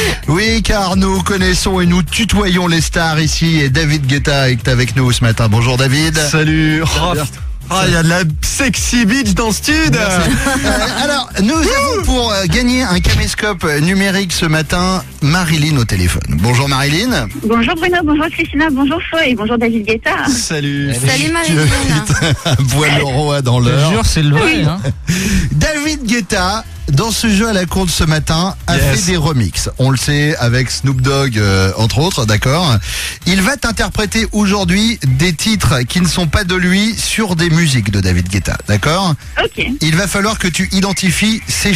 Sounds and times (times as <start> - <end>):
Music: 0.0 - 41.7
Speech: 0.0 - 41.7.